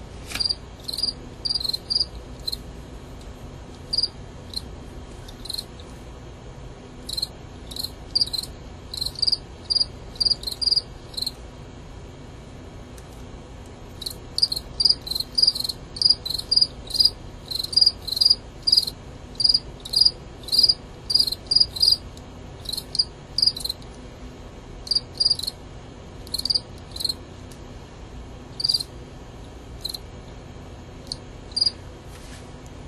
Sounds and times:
Cricket: 0:00.3 - 0:02.7, 0:03.9 - 0:05.9, 0:07.0 - 0:11.4, 0:13.9 - 0:23.9, 0:24.8 - 0:27.3, 0:28.5 - 0:30.2, 0:31.0 - 0:31.8.

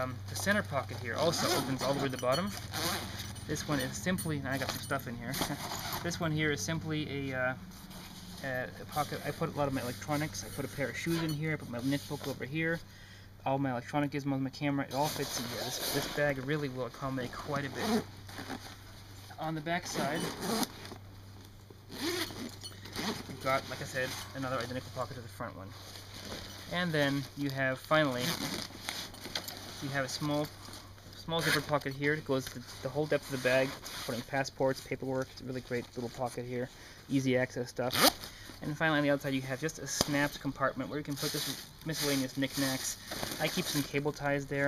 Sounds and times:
Speech: 0:00.0 - 0:02.6, 0:03.5 - 0:07.6, 0:08.4 - 0:12.8, 0:13.4 - 0:18.0, 0:19.3 - 0:20.4, 0:23.3 - 0:25.8, 0:26.7 - 0:28.5, 0:29.8 - 0:30.5, 0:31.2 - 0:44.6.

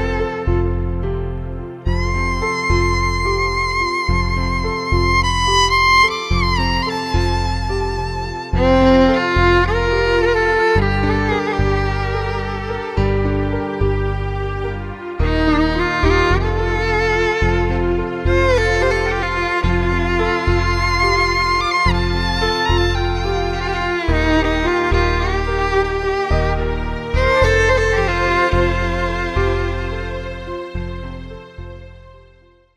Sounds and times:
Sad music: 0:00.0 - 0:32.7.

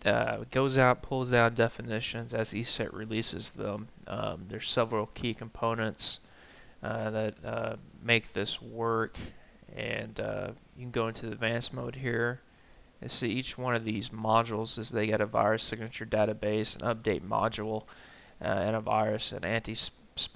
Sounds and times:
Speech: 0:00.0 - 0:06.2, 0:06.8 - 0:12.4, 0:13.0 - 0:20.3.

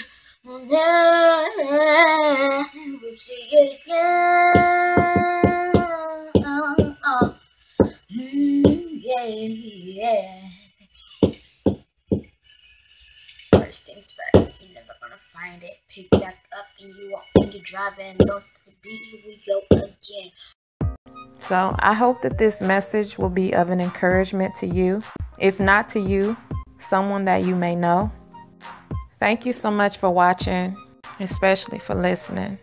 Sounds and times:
Music: 0:02.1 - 0:10.2, 0:11.2 - 0:20.2, 0:20.8 - 0:32.6
Knock: 0:07.2 - 0:08.0, 0:11.2 - 0:12.3.

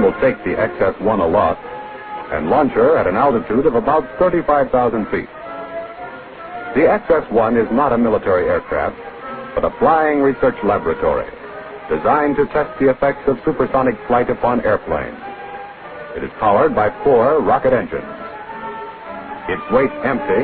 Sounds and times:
Speech: 0:00.0 - 0:01.6, 0:02.3 - 0:05.3, 0:06.8 - 0:09.0, 0:09.6 - 0:15.2, 0:16.2 - 0:18.1, 0:19.5 - 0:20.4
Music: 0:00.0 - 0:20.4.

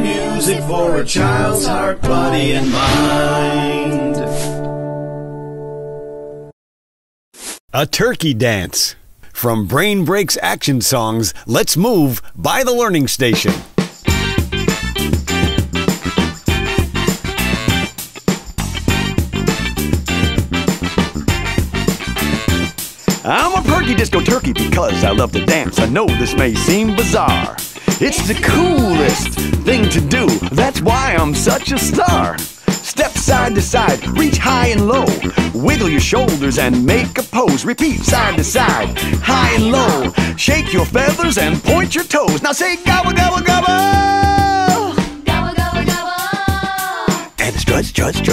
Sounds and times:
Music: 0:00.0 - 0:06.6, 0:13.3 - 0:48.3.

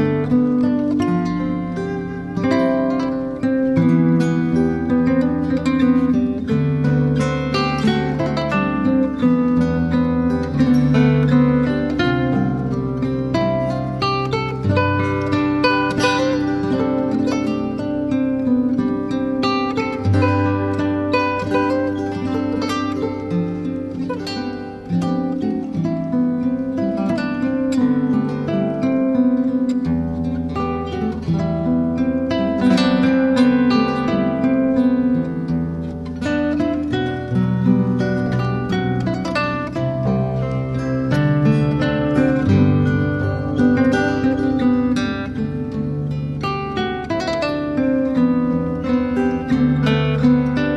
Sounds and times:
Acoustic guitar: 0:00.0 - 0:50.7.

